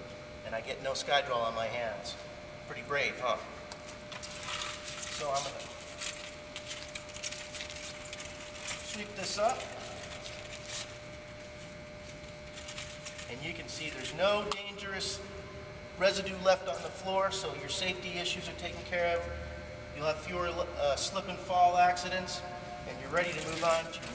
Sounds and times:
Speech: 0:00.4 - 0:03.5, 0:05.2 - 0:05.7, 0:08.9 - 0:09.8, 0:13.3 - 0:15.3, 0:16.0 - 0:19.4, 0:20.0 - 0:24.1.

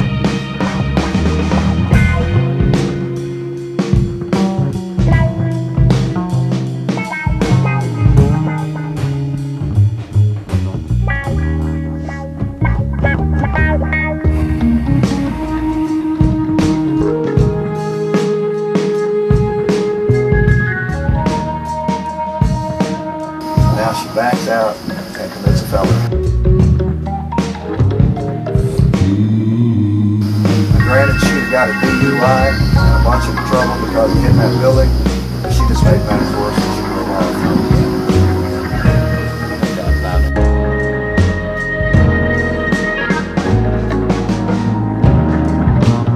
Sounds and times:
Music: 0:00.0 - 0:46.1
Speech: 0:23.6 - 0:26.1, 0:30.8 - 0:37.8, 0:39.4 - 0:40.4.

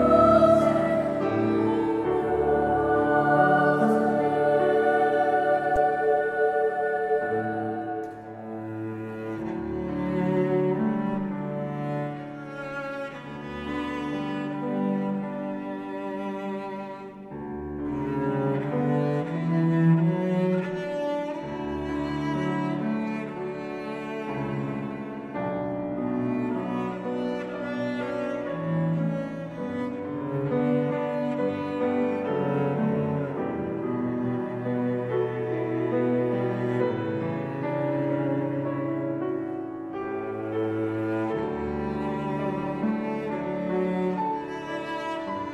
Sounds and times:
Tender music: 0:00.0 - 0:13.0.

